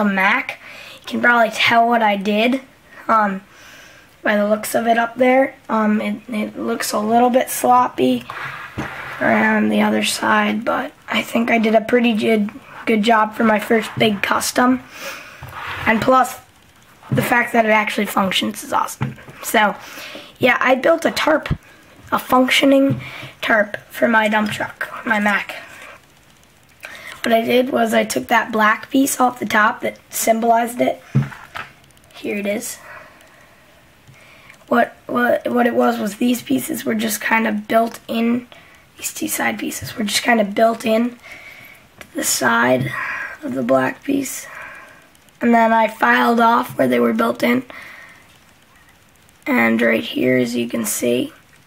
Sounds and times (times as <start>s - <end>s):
Speech: 0.0s - 3.4s, 4.2s - 8.3s, 9.2s - 14.9s, 15.8s - 16.5s, 17.1s - 19.8s, 20.4s - 25.6s, 27.2s - 31.0s, 32.2s - 32.8s, 34.7s - 41.2s, 42.1s - 44.5s, 45.4s - 47.7s, 49.4s - 51.4s.